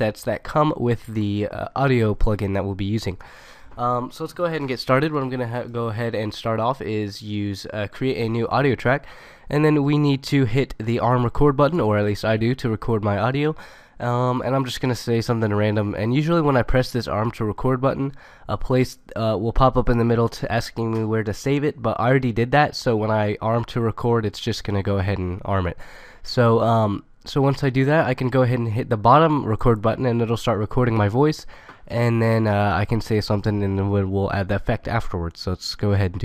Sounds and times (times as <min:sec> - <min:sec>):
Speech: 0:00.0 - 0:03.2, 0:03.8 - 0:36.2.